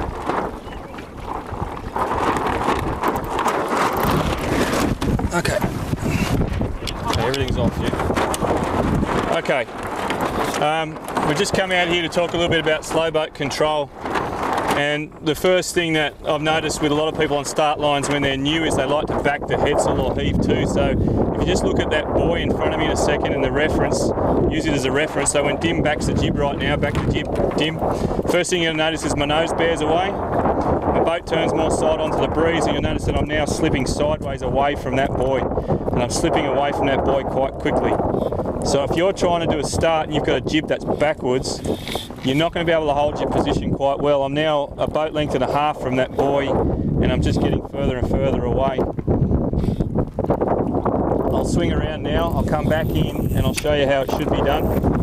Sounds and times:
Boat, Water vehicle: 0.0 - 55.0
Speech: 6.9 - 8.0, 9.3 - 9.7, 10.6 - 13.9, 14.8 - 30.2, 31.0 - 35.4, 36.0 - 38.0, 38.6 - 41.6, 42.2 - 48.9, 51.3 - 54.8.

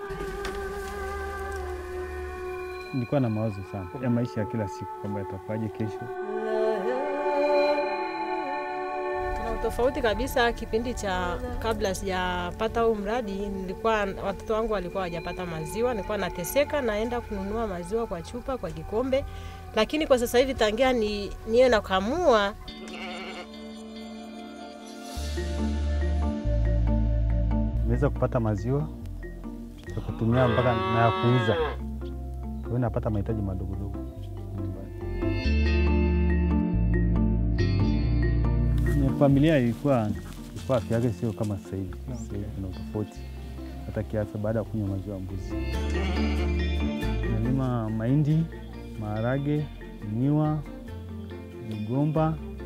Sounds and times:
Music: 0.0 - 52.6
Bleat: 22.7 - 23.6, 29.9 - 31.8, 45.6 - 47.2.

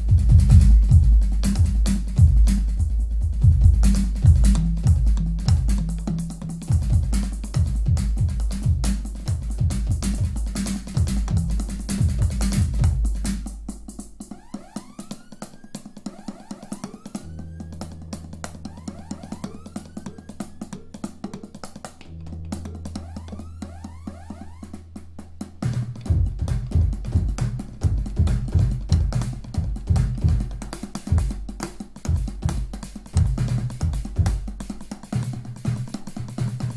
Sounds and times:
Drum: 0.0 - 36.7
Drum kit: 0.0 - 36.7.

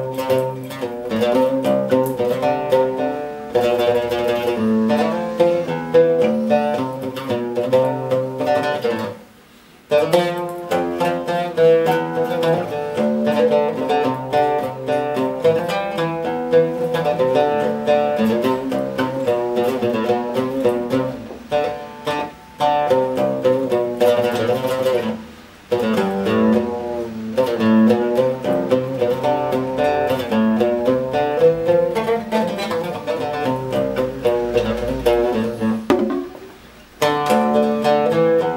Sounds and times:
Mandolin: 0.0 - 38.5
Ukulele: 0.0 - 38.5.

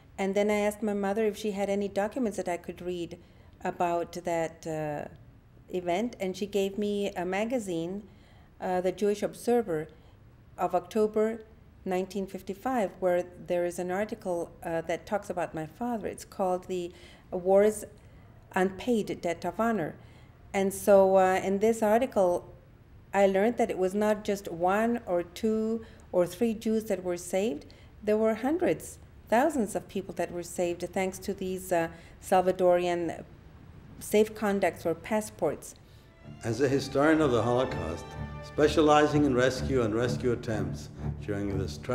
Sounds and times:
Speech: 0.2 - 9.9, 10.6 - 18.0, 18.6 - 20.0, 20.6 - 22.5, 23.2 - 33.3, 34.0 - 35.8, 36.4 - 41.9.

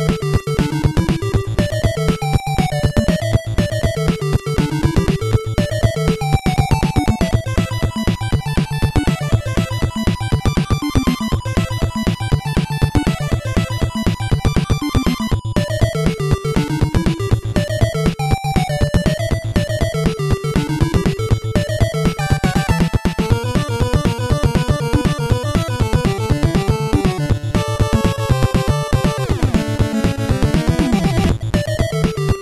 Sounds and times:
Soundtrack music: 0.0 - 32.4
Video game music: 0.0 - 32.4.

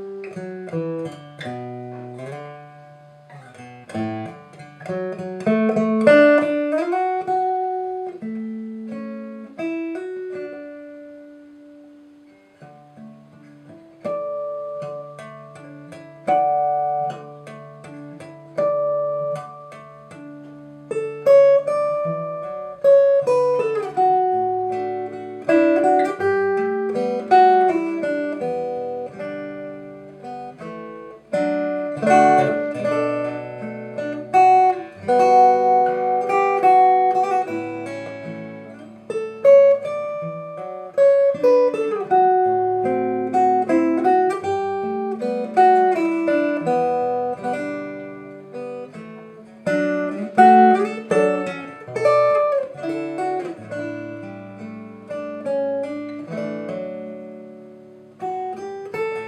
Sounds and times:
Guitar: 0.0 - 59.2.

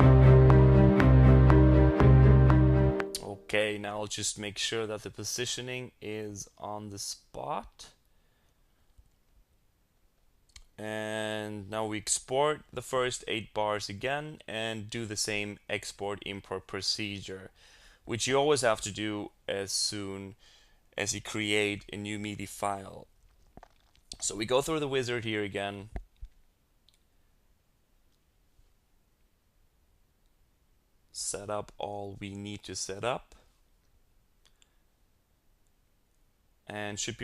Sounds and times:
Speech: 3.2 - 8.0, 10.7 - 20.4, 21.0 - 23.1, 24.2 - 26.0, 31.1 - 33.5, 36.7 - 37.2.

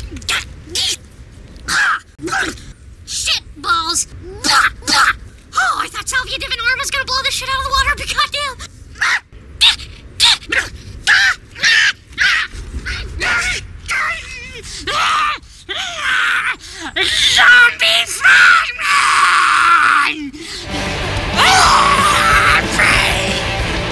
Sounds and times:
Speech: 2.2 - 8.7, 17.0 - 19.0.

